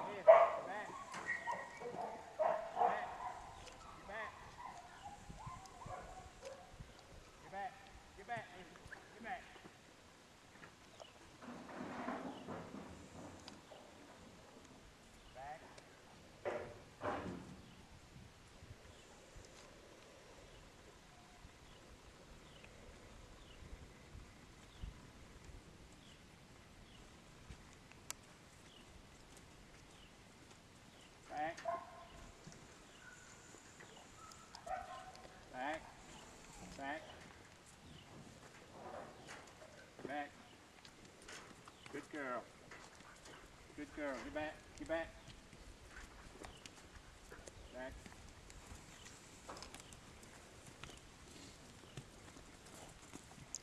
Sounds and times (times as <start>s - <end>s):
Bow-wow: 0.1s - 6.7s, 34.2s - 35.3s
Speech: 7.5s - 9.6s, 15.4s - 15.8s, 35.5s - 35.9s, 36.8s - 37.2s, 40.1s - 40.4s, 41.9s - 42.5s, 43.8s - 45.2s, 47.7s - 48.0s.